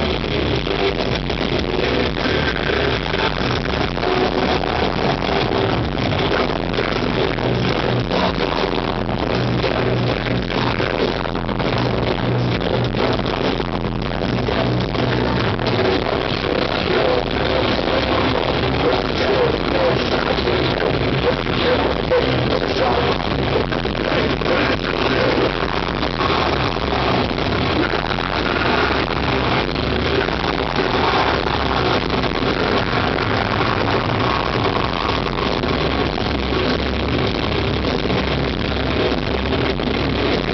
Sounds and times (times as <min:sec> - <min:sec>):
Drum: 0:00.0 - 0:40.5
Drum kit: 0:00.0 - 0:40.5.